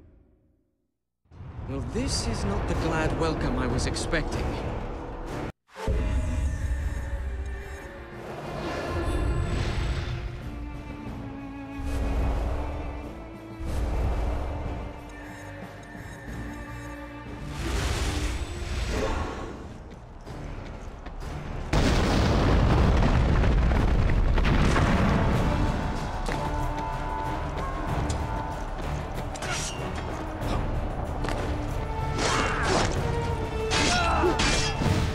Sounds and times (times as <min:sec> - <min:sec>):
Music: 0:02.0 - 0:23.6, 0:24.4 - 0:35.1.